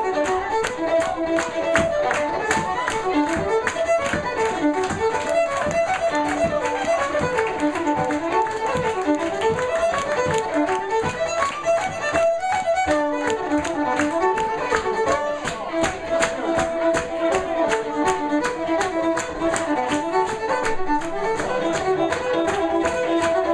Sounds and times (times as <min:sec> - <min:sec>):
Violin, fiddle: 0:00.0 - 0:23.5.